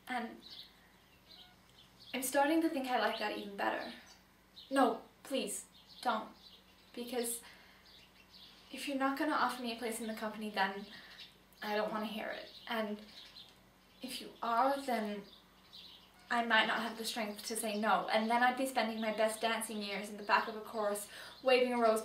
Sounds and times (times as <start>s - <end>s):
Narration, monologue: 0.0s - 22.0s.